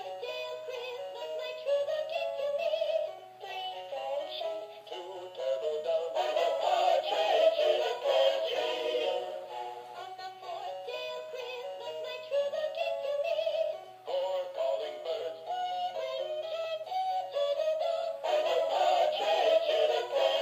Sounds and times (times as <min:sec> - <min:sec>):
Choir: 0:05.0 - 0:09.5, 0:14.1 - 0:15.3, 0:17.9 - 0:20.4.